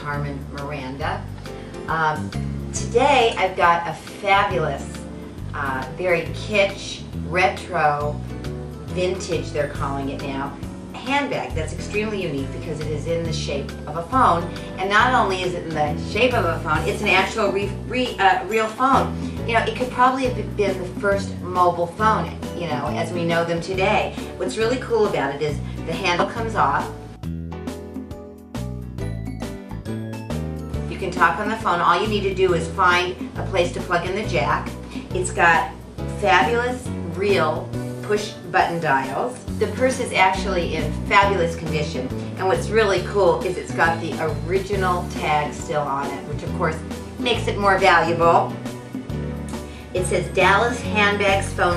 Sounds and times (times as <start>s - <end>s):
Speech: 0.0s - 1.3s, 1.9s - 8.2s, 8.9s - 27.0s, 30.9s - 48.5s, 50.0s - 51.7s
Music: 0.0s - 51.7s.